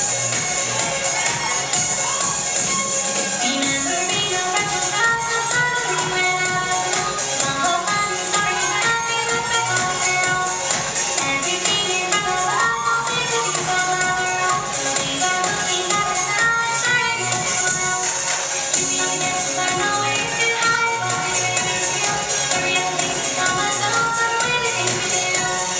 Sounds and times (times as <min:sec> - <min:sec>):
Music: 0:00.0 - 0:25.7.